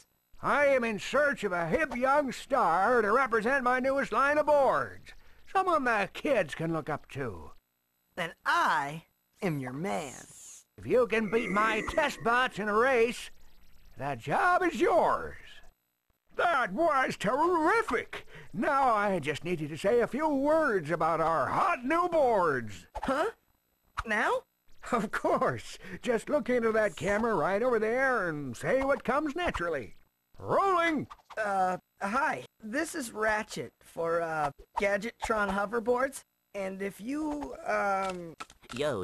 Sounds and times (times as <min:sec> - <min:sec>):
Speech: 0:00.4 - 0:07.6, 0:08.2 - 0:13.3, 0:14.0 - 0:15.6, 0:16.4 - 0:23.4, 0:25.0 - 0:39.0.